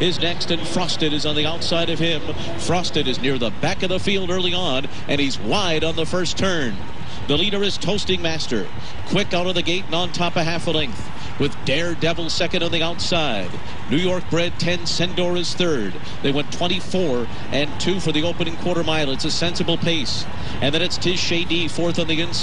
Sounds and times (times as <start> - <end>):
Speech: 0.0 - 22.4.